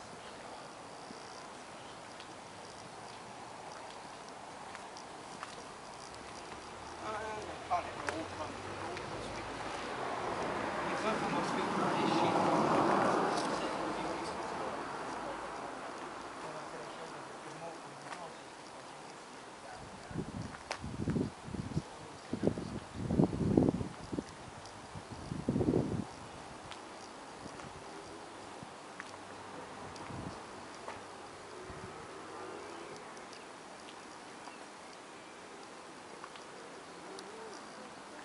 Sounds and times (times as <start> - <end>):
Speech: 7.0 - 9.6, 10.8 - 12.8, 13.4 - 19.0.